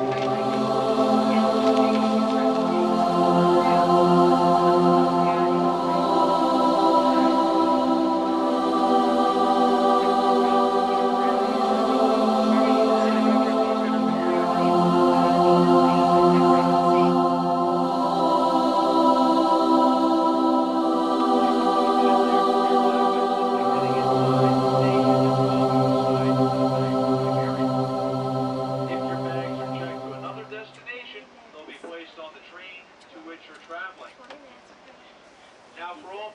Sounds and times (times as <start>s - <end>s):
Choir: 0.0s - 31.0s.